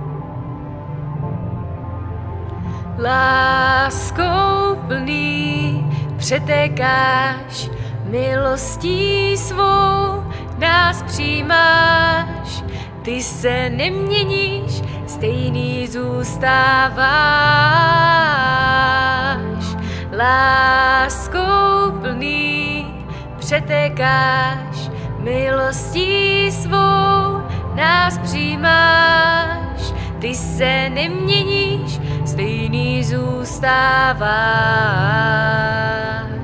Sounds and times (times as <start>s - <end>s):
Music: 0.0s - 36.4s.